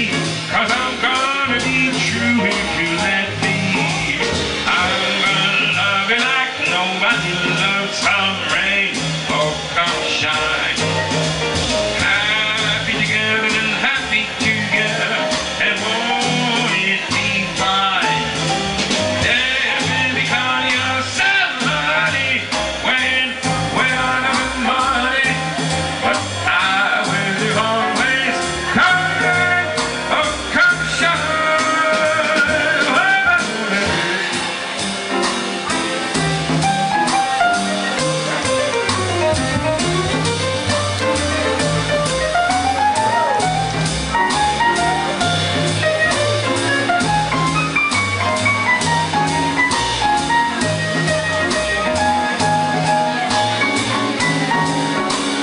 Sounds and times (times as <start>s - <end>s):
Music: 0.0s - 55.4s.